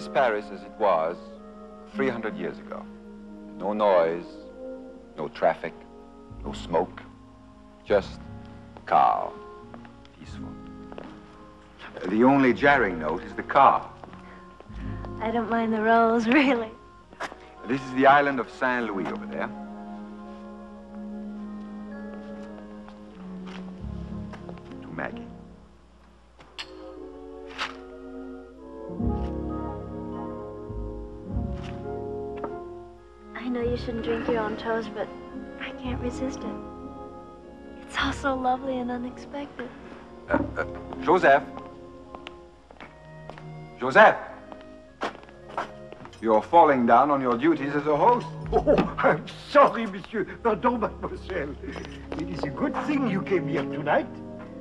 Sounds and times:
Music: 0:00.0 - 0:54.6.

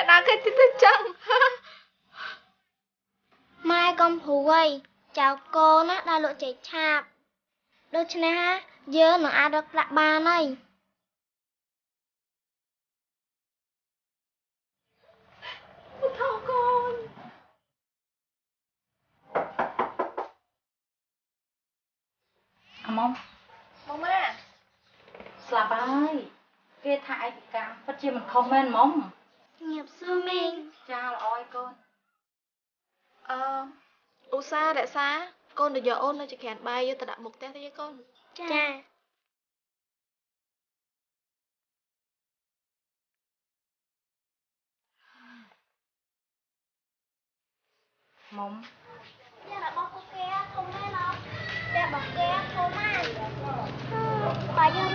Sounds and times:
Inside, small room: 0:00.0 - 0:11.2, 0:22.2 - 0:39.4, 0:47.6 - 0:54.9.

